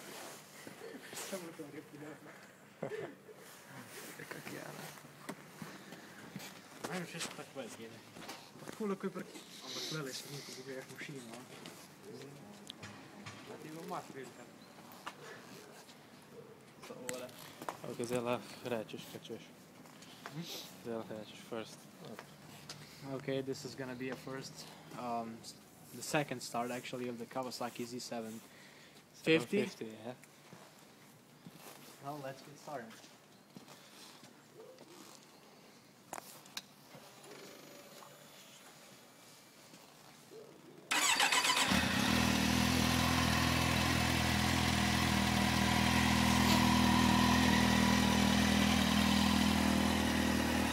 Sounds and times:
Speech: 0:01.2 - 0:02.4, 0:06.8 - 0:08.0, 0:08.7 - 0:12.6, 0:13.4 - 0:14.5, 0:20.4 - 0:22.2, 0:23.0 - 0:28.4, 0:29.2 - 0:30.2, 0:32.0 - 0:33.1.

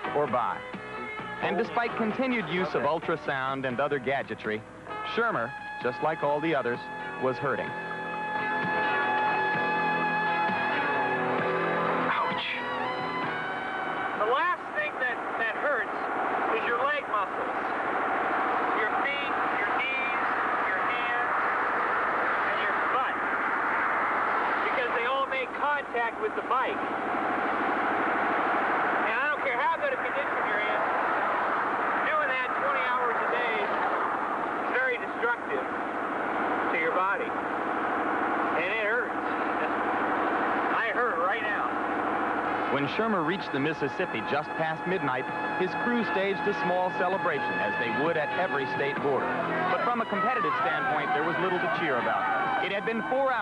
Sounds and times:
Vehicle: 0:06.6 - 0:53.4.

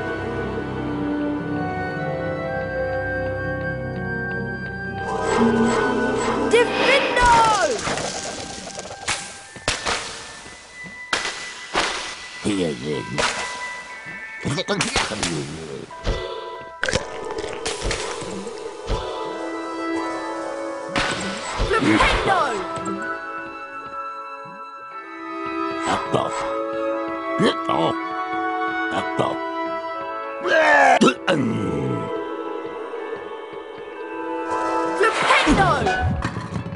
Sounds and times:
Music: 0:00.0 - 0:36.7
Speech: 0:06.5 - 0:07.8, 0:35.0 - 0:36.0.

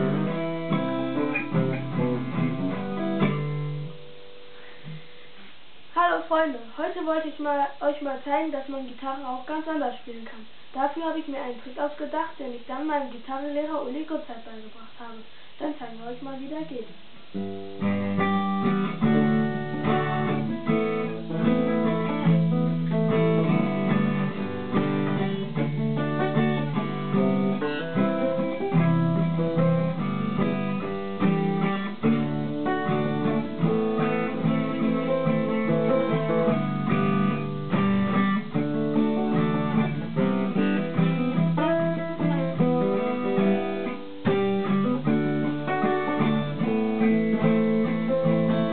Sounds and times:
Electric guitar: 0:00.0 - 0:05.6, 0:17.2 - 0:48.7
Strum: 0:00.0 - 0:05.6, 0:17.2 - 0:48.7.

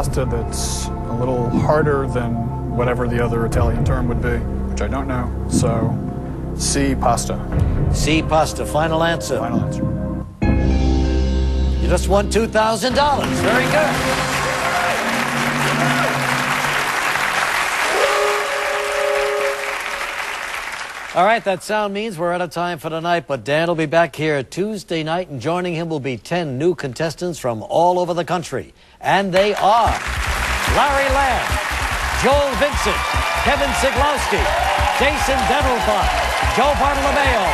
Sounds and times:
Music: 0:00.0 - 0:17.9, 0:29.8 - 0:37.5
Speech: 0:08.0 - 0:09.8, 0:21.2 - 0:30.0.

